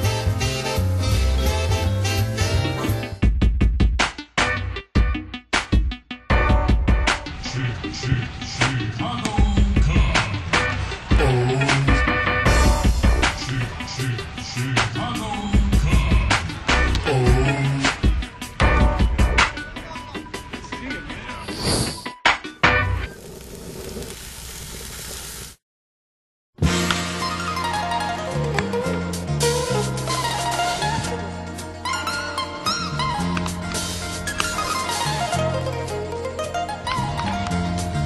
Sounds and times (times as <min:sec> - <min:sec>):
Soundtrack music: 0:00.0 - 0:21.5, 0:26.6 - 0:38.0
Speech: 0:19.8 - 0:21.4.